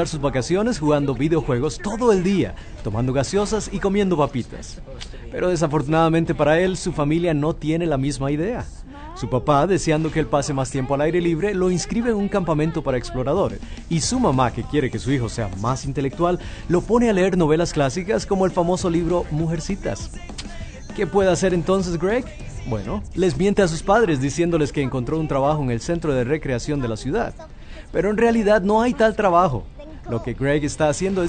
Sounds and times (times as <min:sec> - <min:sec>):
Music: 0:00.0 - 0:04.3, 0:09.8 - 0:27.8
Speech: 0:00.0 - 0:20.2, 0:20.8 - 0:31.2.